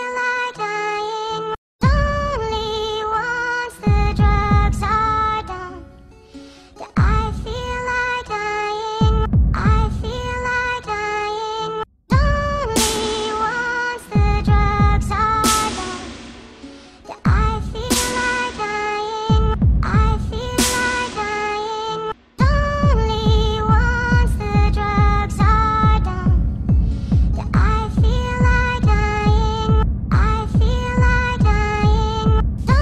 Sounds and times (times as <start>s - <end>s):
Dubstep: 12.2s - 32.8s.